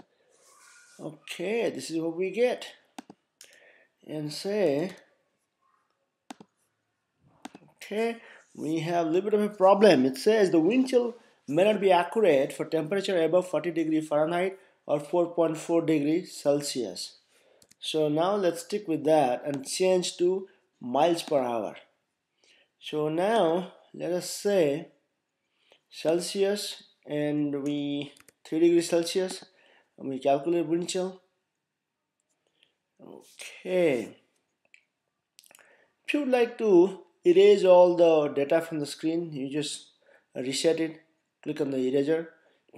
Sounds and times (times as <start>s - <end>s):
Speech: 1.0s - 2.9s, 4.1s - 5.1s, 7.8s - 17.2s, 17.8s - 21.9s, 22.8s - 25.0s, 26.0s - 31.3s, 33.0s - 34.2s, 36.1s - 42.7s.